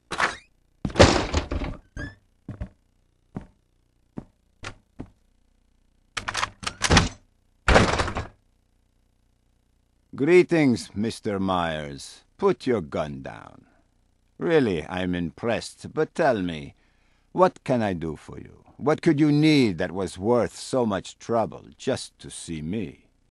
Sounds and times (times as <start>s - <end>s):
Speech: 10.1s - 13.7s, 14.4s - 16.8s, 17.4s - 23.1s.